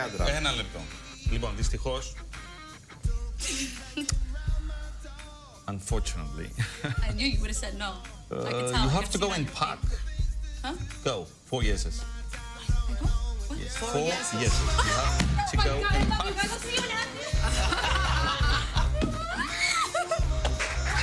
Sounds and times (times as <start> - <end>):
Laughter: 6.6 - 7.1, 17.0 - 21.0.